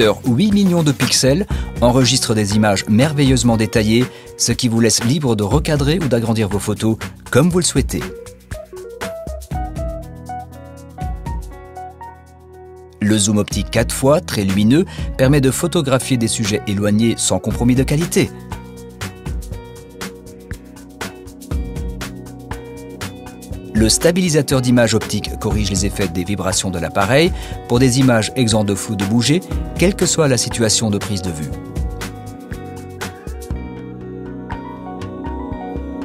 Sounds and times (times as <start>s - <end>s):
Speech: 0.0s - 8.1s, 13.0s - 18.3s, 23.8s - 31.6s
Music: 0.0s - 36.0s.